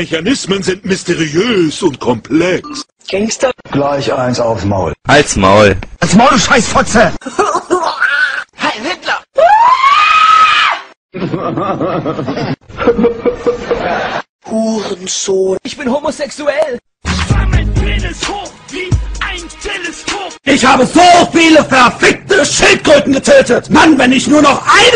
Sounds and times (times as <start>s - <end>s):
Speech: 0.0s - 7.2s, 14.5s - 16.8s, 20.5s - 24.9s
Music: 17.0s - 20.5s.